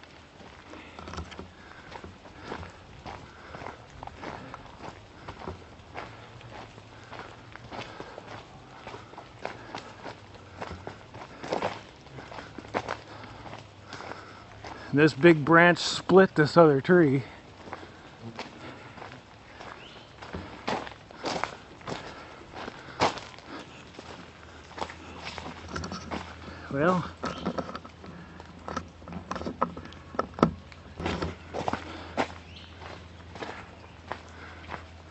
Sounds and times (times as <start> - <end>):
Speech: 15.0 - 17.4, 26.7 - 27.1.